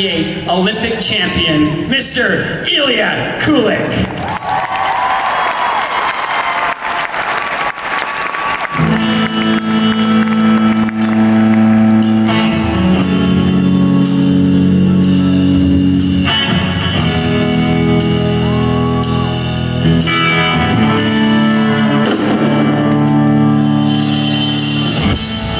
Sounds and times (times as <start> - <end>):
Speech: 0.0 - 4.1
Music: 8.3 - 25.5.